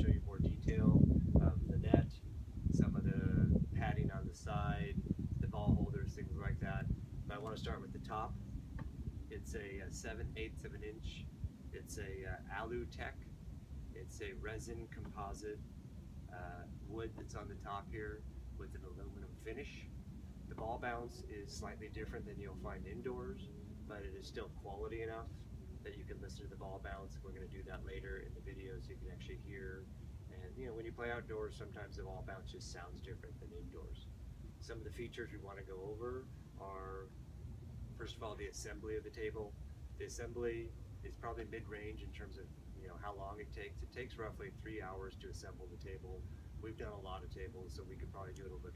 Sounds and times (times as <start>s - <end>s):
Speech: 0.0s - 8.4s, 9.3s - 13.3s, 14.0s - 15.6s, 16.3s - 19.9s, 20.5s - 37.2s, 38.0s - 48.7s.